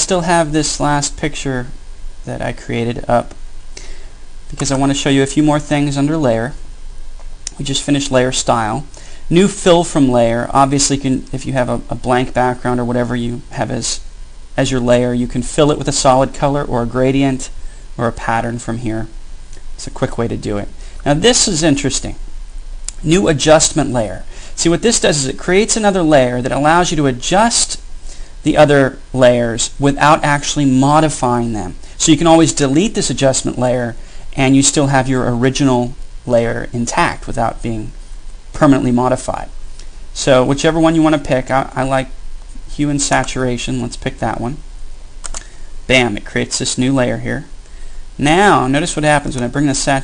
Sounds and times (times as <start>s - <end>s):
Speech: 0.0s - 3.4s, 4.5s - 6.6s, 7.5s - 19.2s, 19.8s - 22.2s, 22.9s - 27.8s, 28.4s - 39.6s, 40.2s - 44.6s, 45.9s - 47.5s, 48.2s - 50.0s.